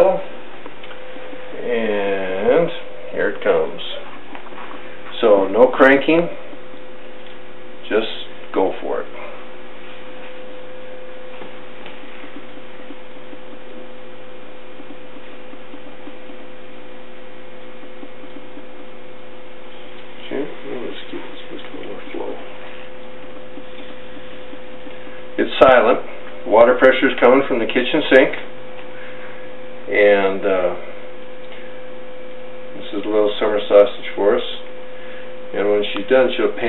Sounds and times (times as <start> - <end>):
Speech: 0.0 - 0.3, 1.5 - 4.1, 5.1 - 6.4, 7.8 - 9.3, 20.2 - 22.6, 25.4 - 28.5, 29.9 - 30.9, 32.8 - 34.7, 35.5 - 36.6.